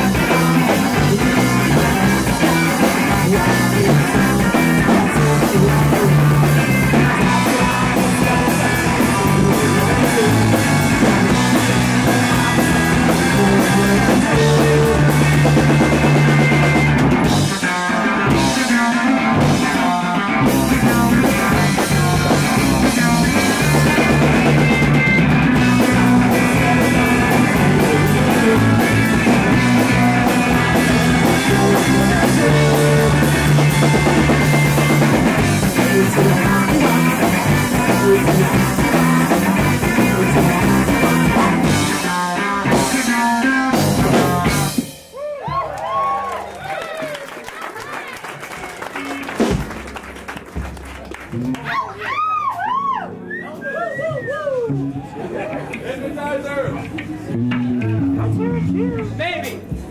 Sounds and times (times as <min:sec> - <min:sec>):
Punk rock: 0:00.0 - 0:45.6.